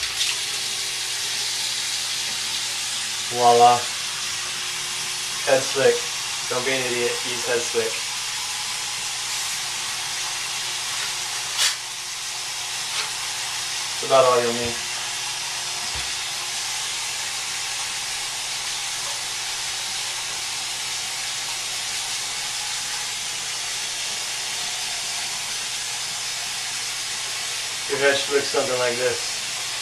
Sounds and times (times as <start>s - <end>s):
Speech: 3.3s - 3.9s, 5.4s - 8.0s, 14.0s - 14.9s, 27.9s - 29.4s.